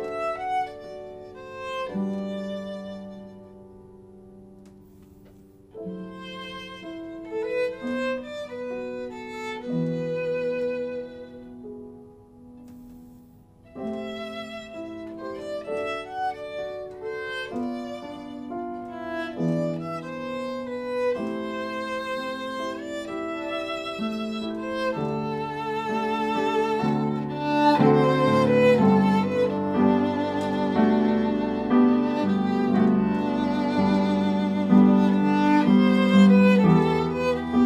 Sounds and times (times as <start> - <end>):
Violin, fiddle: 0.0 - 3.6, 4.8 - 11.7, 13.7 - 37.6.